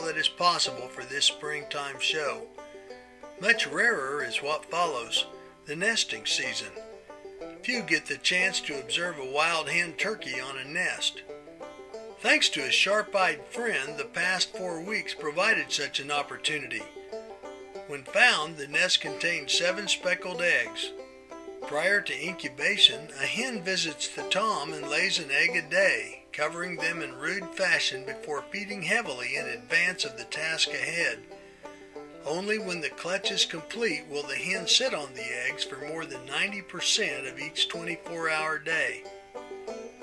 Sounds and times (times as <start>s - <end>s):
Speech: 0.0s - 2.5s, 3.4s - 6.8s, 7.6s - 11.2s, 12.2s - 16.9s, 17.9s - 20.9s, 21.7s - 31.3s, 32.2s - 39.0s
Music: 0.0s - 40.0s.